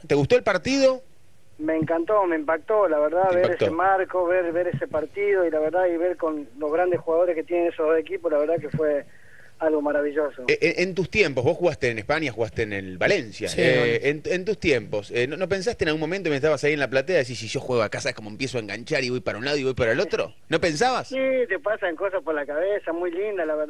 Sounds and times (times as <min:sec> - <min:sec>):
Speech: 0:00.0 - 0:01.0, 0:01.6 - 0:23.6.